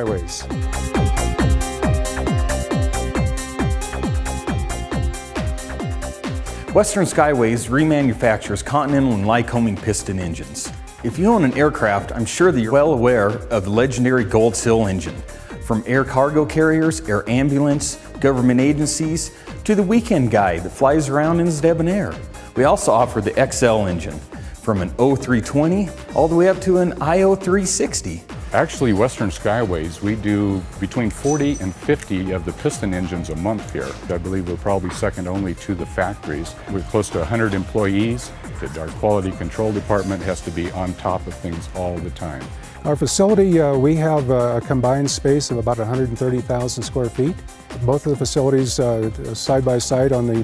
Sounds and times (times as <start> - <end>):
Speech: 0.0 - 0.5, 6.7 - 50.4
Music: 0.0 - 50.4.